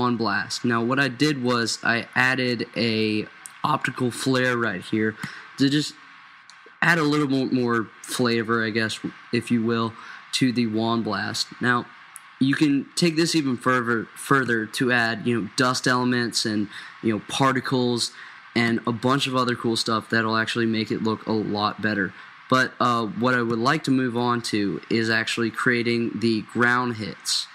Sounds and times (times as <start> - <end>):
Speech: 0.0 - 27.5.